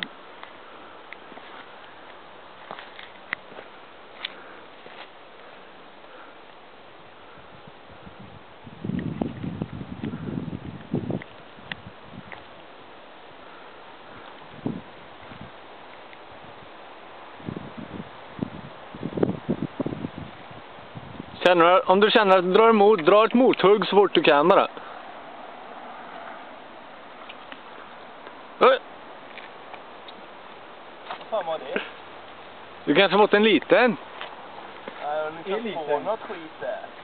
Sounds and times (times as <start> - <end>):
Outside, rural or natural: 0.0 - 37.0
Speech: 21.4 - 24.8, 31.3 - 31.9, 32.9 - 34.0, 35.0 - 37.0.